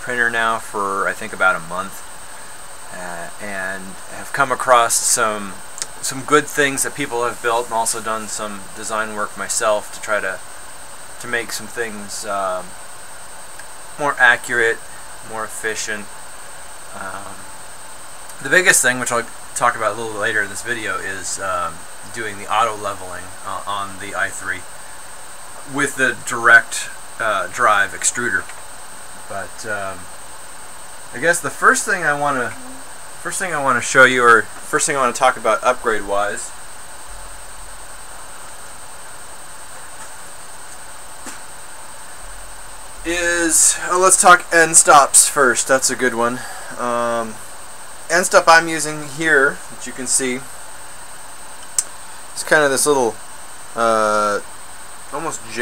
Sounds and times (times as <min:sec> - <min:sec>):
Speech: 0:00.0 - 0:02.0, 0:02.9 - 0:10.4, 0:11.2 - 0:12.7, 0:14.0 - 0:16.1, 0:16.9 - 0:17.4, 0:18.3 - 0:24.6, 0:25.6 - 0:28.5, 0:29.3 - 0:30.0, 0:31.2 - 0:36.5, 0:43.1 - 0:47.4, 0:48.1 - 0:50.5, 0:52.4 - 0:53.2, 0:53.8 - 0:54.4, 0:55.1 - 0:55.6.